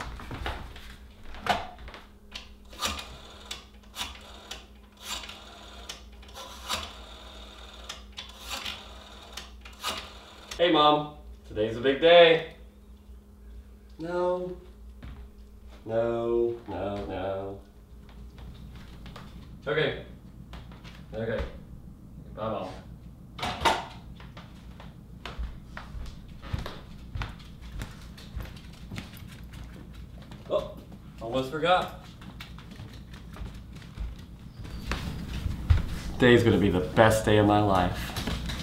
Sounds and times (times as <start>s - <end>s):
Speech: 22.4s - 22.9s, 30.5s - 32.0s, 36.2s - 38.0s.